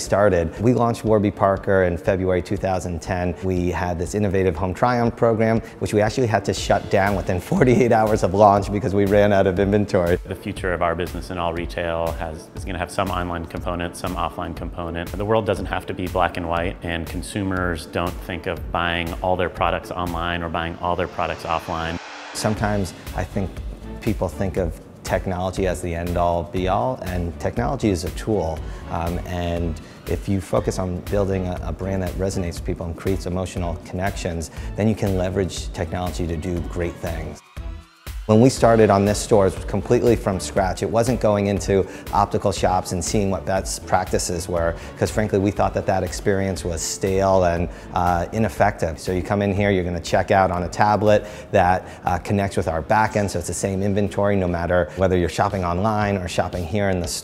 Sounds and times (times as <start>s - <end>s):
Speech: 0.0s - 37.4s, 38.3s - 57.2s
Music: 0.0s - 57.2s.